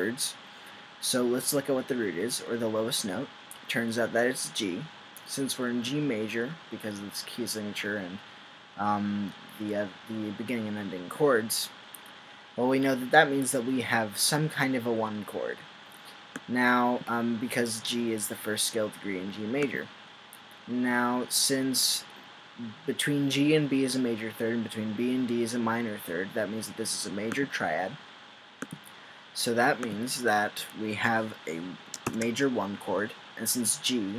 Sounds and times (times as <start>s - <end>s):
Speech: 0.0s - 0.4s, 1.0s - 8.2s, 8.8s - 11.8s, 12.6s - 15.6s, 16.4s - 19.9s, 20.7s - 28.0s, 29.4s - 34.1s.